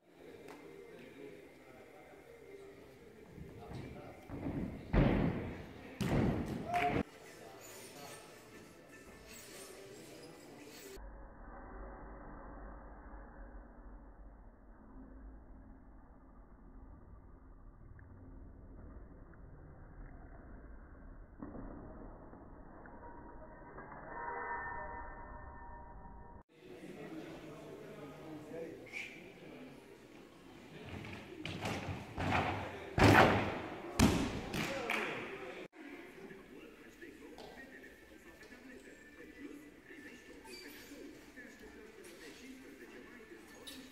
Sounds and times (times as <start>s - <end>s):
Speech: 0.0s - 11.0s, 26.5s - 43.9s.